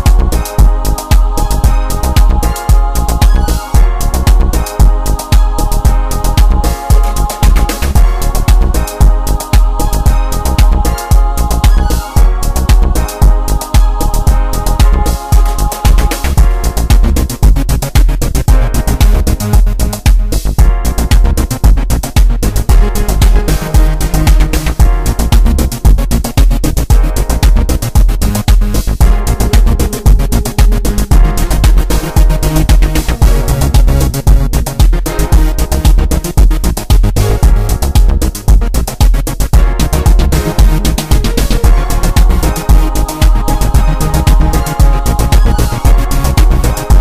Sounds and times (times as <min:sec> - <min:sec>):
Techno: 0:00.0 - 0:47.0.